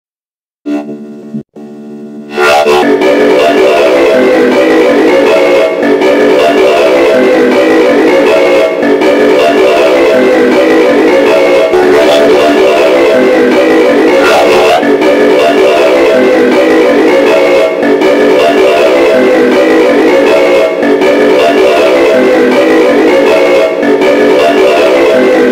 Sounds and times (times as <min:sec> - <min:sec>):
Music: 0:00.6 - 0:25.5.